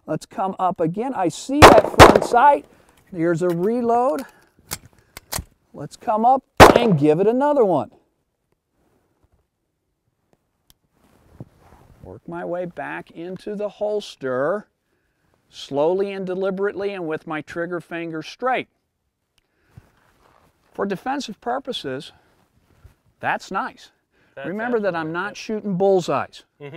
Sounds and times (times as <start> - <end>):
Speech: 0.0 - 1.6, 2.2 - 4.3, 5.7 - 8.0, 12.0 - 14.7, 15.5 - 18.7, 20.8 - 22.2, 23.2 - 26.7
Outside, rural or natural: 0.0 - 26.7.